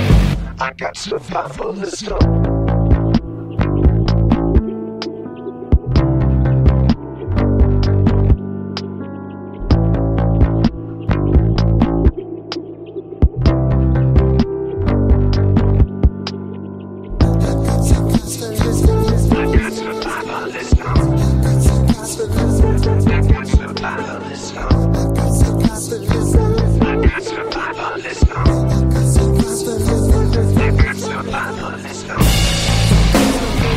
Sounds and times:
Electronic music: 1.4s - 33.7s.

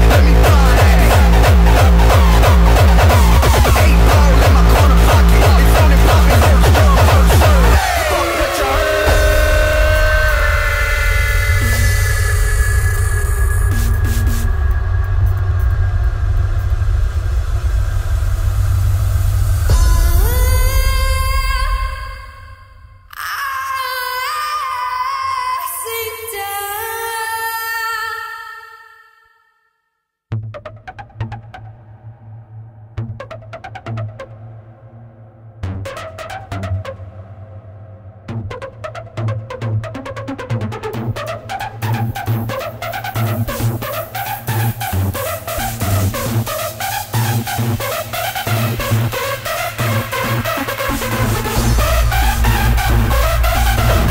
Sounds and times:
Sound effect: 0.0s - 23.1s, 30.4s - 54.1s
Music: 0.0s - 24.8s, 25.5s - 54.1s.

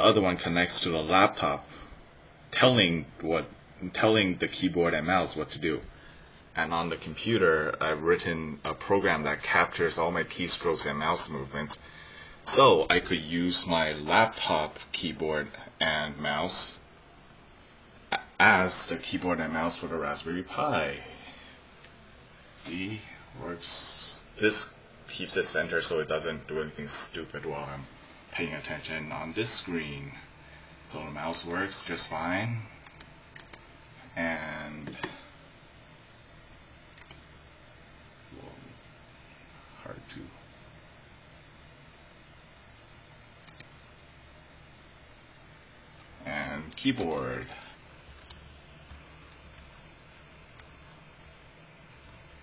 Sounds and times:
Speech: 0.0s - 1.7s, 2.5s - 5.9s, 6.6s - 11.8s, 12.5s - 16.8s, 18.1s - 21.2s, 22.6s - 30.3s, 30.9s - 32.8s, 34.1s - 35.2s, 38.3s - 39.0s, 39.8s - 40.4s, 46.2s - 47.8s.

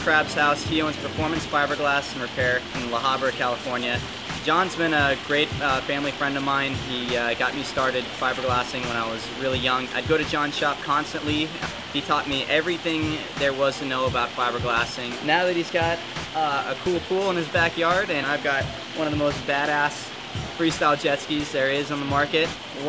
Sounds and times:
Music: 0.0s - 22.8s
Speech: 0.0s - 22.8s.

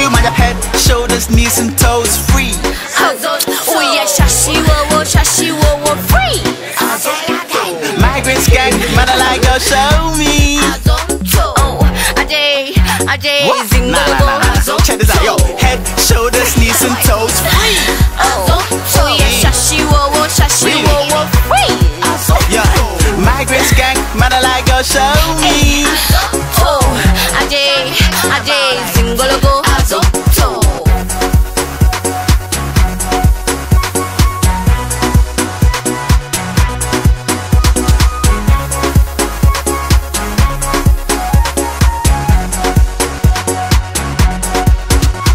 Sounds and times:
Afrobeat: 0.0s - 45.3s.

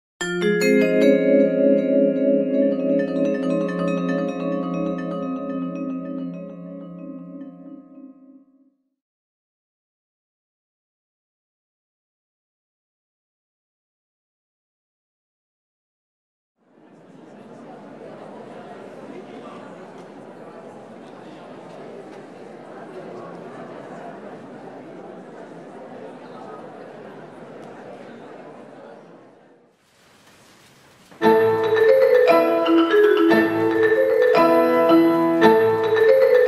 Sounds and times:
Piano: 0.2s - 8.3s, 31.2s - 36.4s
Classical music: 0.2s - 8.4s, 31.2s - 36.4s
Marimba, xylophone: 0.2s - 8.4s, 31.2s - 36.4s.

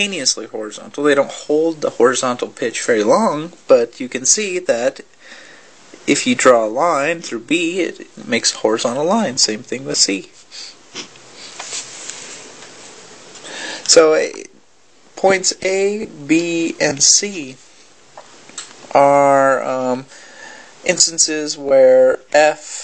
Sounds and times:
Speech: 0.0s - 5.1s, 6.0s - 10.4s, 13.9s - 14.6s, 15.2s - 17.6s, 18.9s - 20.1s, 20.8s - 22.8s.

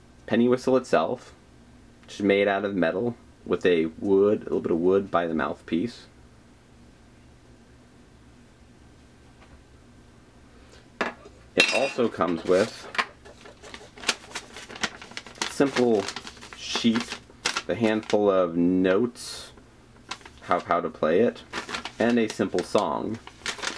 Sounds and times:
Speech: 0.3s - 1.4s, 2.1s - 6.2s, 11.6s - 12.9s, 15.5s - 19.6s, 20.4s - 23.2s.

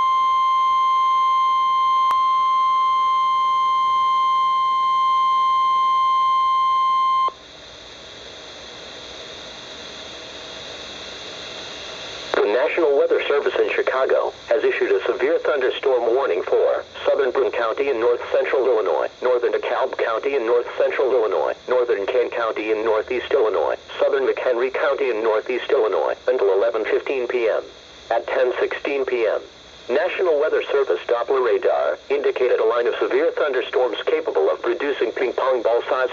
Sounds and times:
Radio: 12.3s - 36.1s
Speech: 12.4s - 36.1s.

